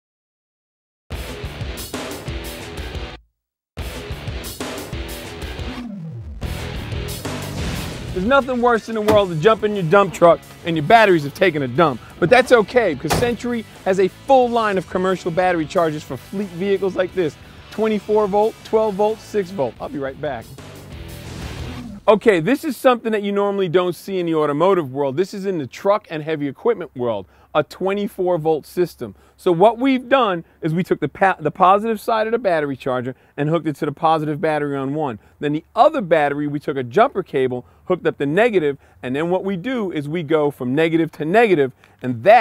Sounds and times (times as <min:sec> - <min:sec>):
Speech: 0:08.2 - 0:20.6, 0:22.1 - 0:42.4.